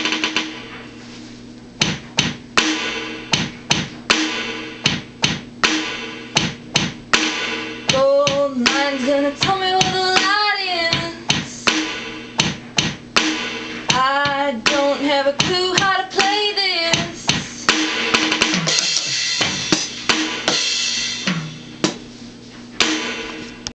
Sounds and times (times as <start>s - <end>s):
Drum: 0.0s - 1.0s, 1.6s - 23.7s
Drum kit: 0.0s - 23.7s.